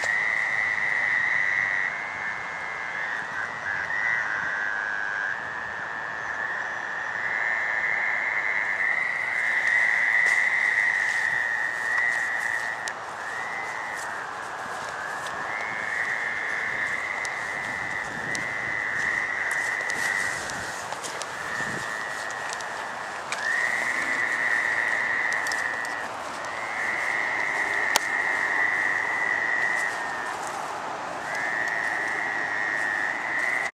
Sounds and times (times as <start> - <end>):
Frog: 0.0 - 33.7.